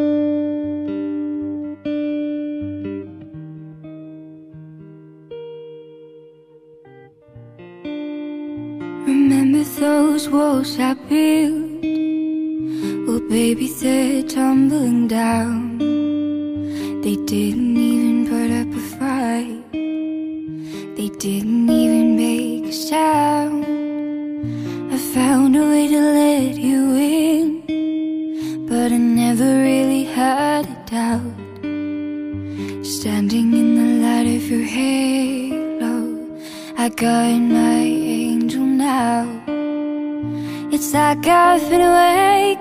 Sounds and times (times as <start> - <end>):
Electronic tuner: 0.0 - 42.6
Plucked string instrument: 0.0 - 42.6.